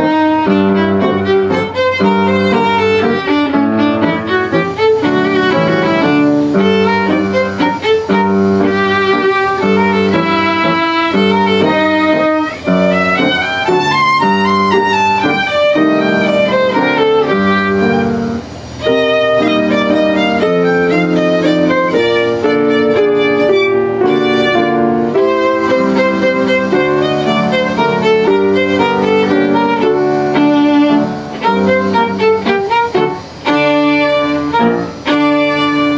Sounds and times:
Violin, fiddle: 0.0 - 35.9.

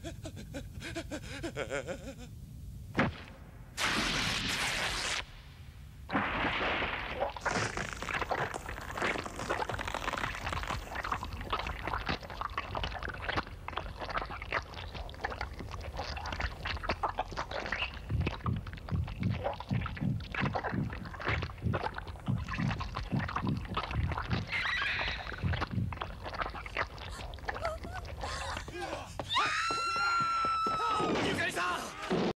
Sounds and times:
Speech: 30.8 - 32.1.

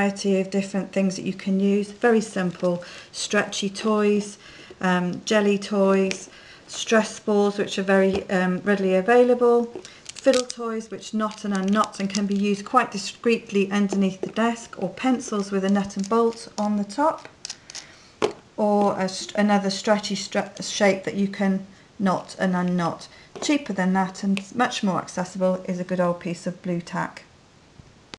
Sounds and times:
Speech: 0.0 - 17.3, 18.6 - 27.3.

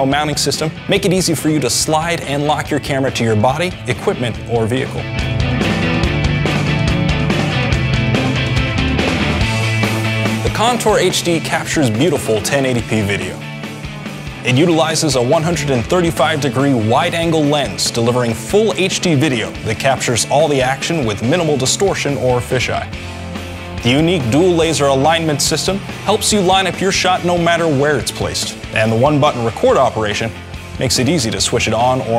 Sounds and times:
Speech: 0.0 - 5.1, 10.4 - 13.4, 14.4 - 23.0, 23.8 - 32.1
Music: 0.0 - 32.1.

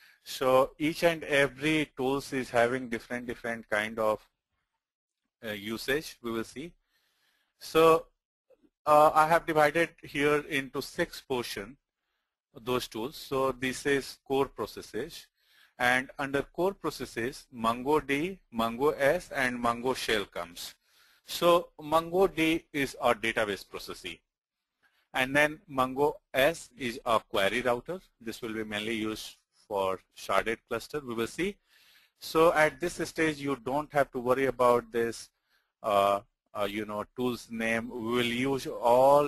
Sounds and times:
Speech: 0.3 - 4.3, 5.4 - 6.8, 7.6 - 8.1, 8.9 - 11.8, 12.6 - 24.2, 25.2 - 31.6, 32.2 - 39.2.

